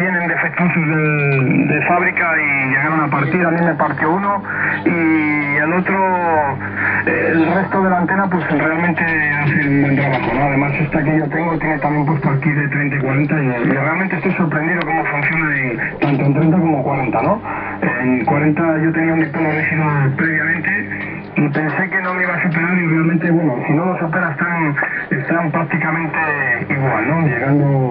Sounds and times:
Radio: 0.0 - 27.9
Speech: 0.0 - 27.9.

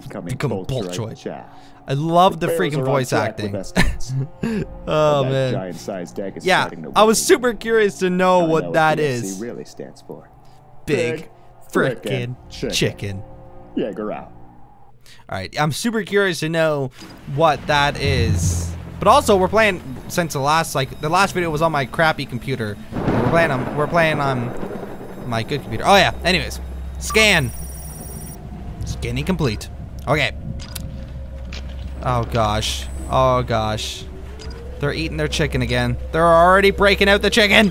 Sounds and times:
Speech: 0.0 - 4.2, 4.9 - 10.3, 10.9 - 13.2, 13.8 - 14.3, 15.2 - 24.5, 25.2 - 27.5, 28.8 - 30.4, 32.0 - 34.1, 34.8 - 37.7.

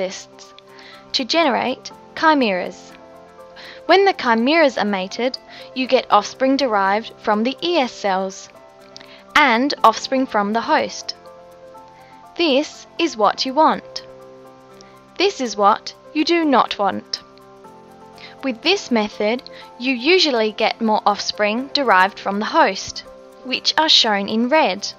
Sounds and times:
Speech: 0.0 - 0.4, 1.1 - 2.9, 3.9 - 8.5, 9.4 - 11.2, 12.4 - 14.0, 15.2 - 17.2, 18.4 - 24.9
Music: 0.0 - 24.9.

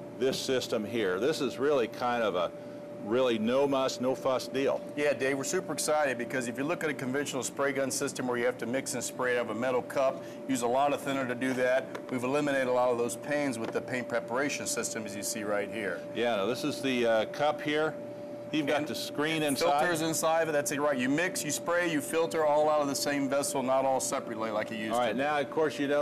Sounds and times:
Speech: 0.2 - 18.0, 18.6 - 26.0.

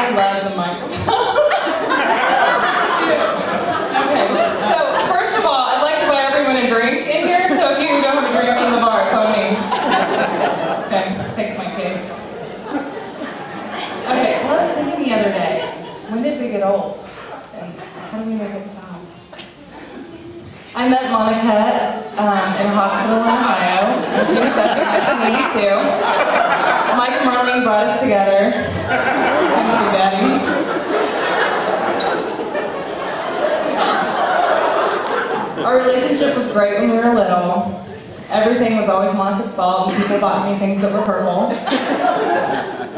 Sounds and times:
Female speech, woman speaking: 0.0 - 1.0, 4.0 - 9.7, 10.8 - 12.1, 14.1 - 19.2, 20.8 - 26.0, 27.0 - 28.7, 29.5 - 30.5, 35.6 - 41.6.

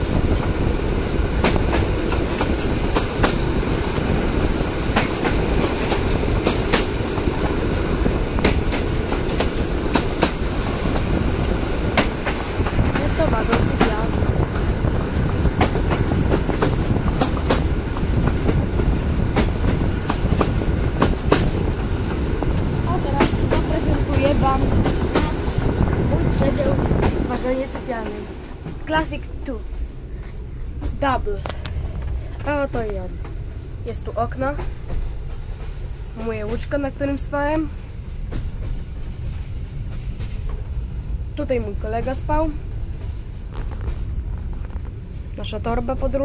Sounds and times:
Railroad car, train wagon: 0.0 - 46.2
Train: 0.0 - 46.2
Speech: 13.0 - 14.2, 22.9 - 28.3, 28.9 - 29.6, 30.9 - 31.5, 32.4 - 33.2, 33.8 - 34.6, 36.2 - 37.7, 41.4 - 42.6, 45.4 - 46.2.

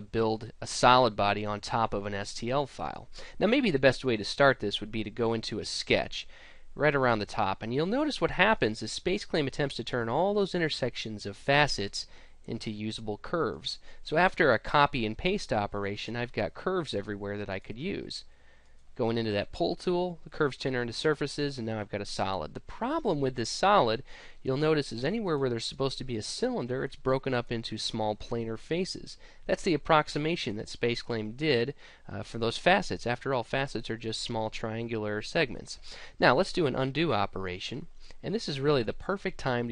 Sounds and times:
Speech: 0.0 - 18.3, 19.0 - 39.7.

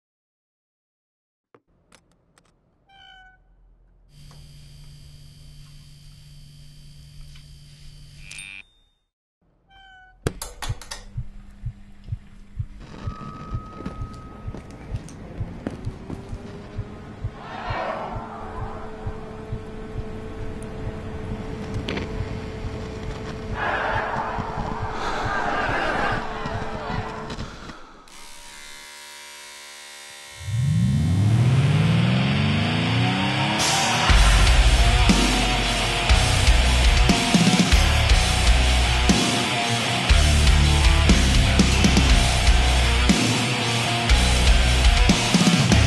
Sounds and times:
Electric shaver, electric razor: 4.2 - 8.7, 28.1 - 33.7
Heavy metal: 31.2 - 45.8
Punk rock: 33.5 - 45.8.

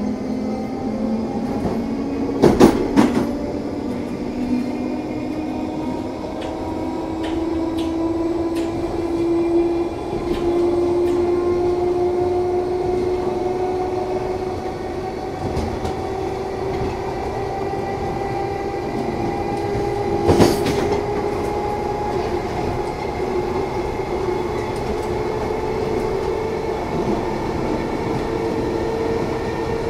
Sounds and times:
Train: 0.0 - 29.8.

